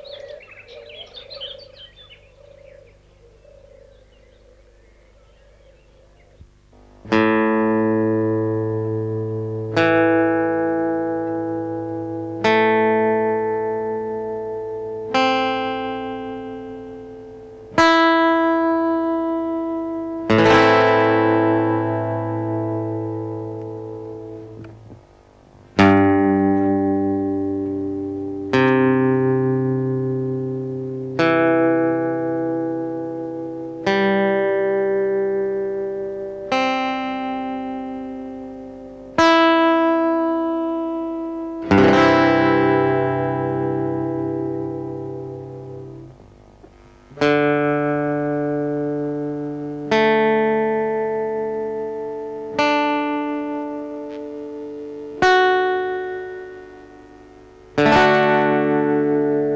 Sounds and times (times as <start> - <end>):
Strum: 6.2 - 59.5.